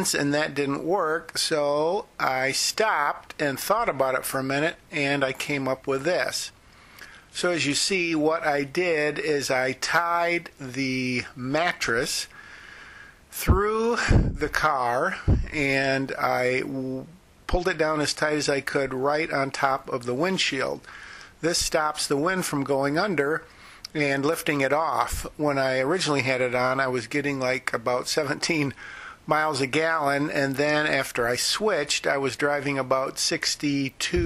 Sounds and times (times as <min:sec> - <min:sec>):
Speech: 0:00.0 - 0:06.6, 0:07.4 - 0:12.4, 0:13.3 - 0:34.2.